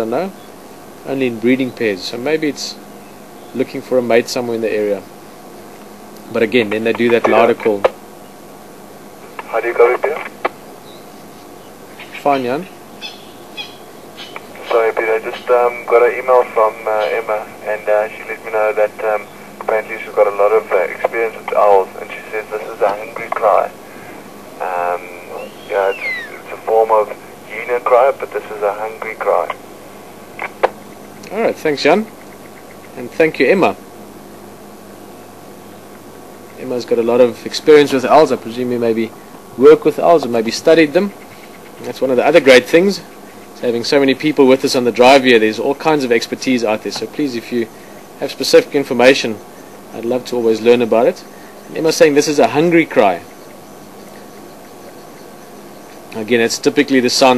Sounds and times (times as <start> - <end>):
Owl: 10.8 - 15.5, 25.2 - 26.9.